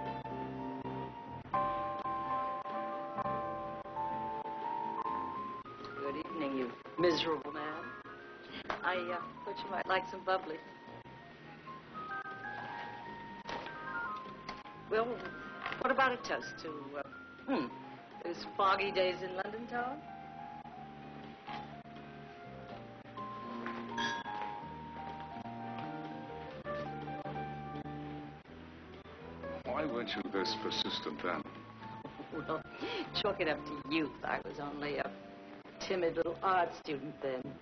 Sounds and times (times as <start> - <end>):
Music: 0.0 - 37.6.